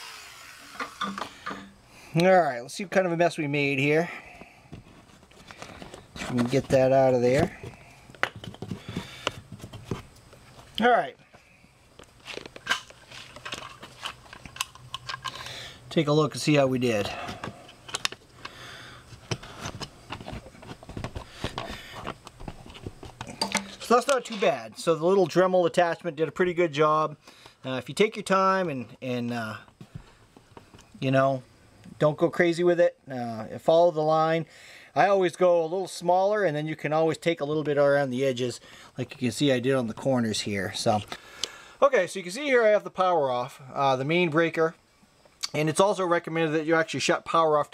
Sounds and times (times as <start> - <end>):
Speech: 2.2 - 4.2, 6.2 - 7.6, 10.8 - 11.2, 15.9 - 17.2, 23.8 - 29.7, 31.0 - 31.4, 32.0 - 41.1, 41.8 - 44.8, 45.5 - 47.7.